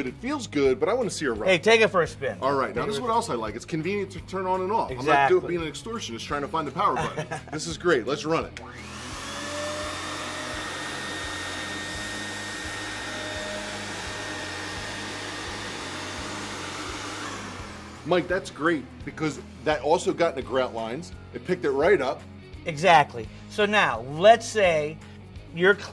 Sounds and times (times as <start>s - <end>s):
Speech: 0.0s - 8.6s, 18.1s - 25.9s
Music: 0.0s - 25.9s
Vacuum cleaner: 8.6s - 18.6s.